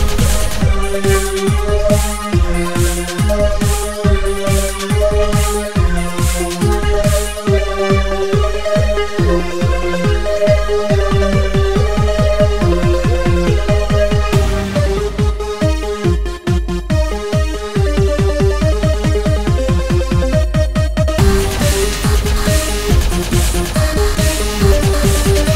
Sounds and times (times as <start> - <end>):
Dubstep: 0.0 - 16.0, 21.2 - 25.5.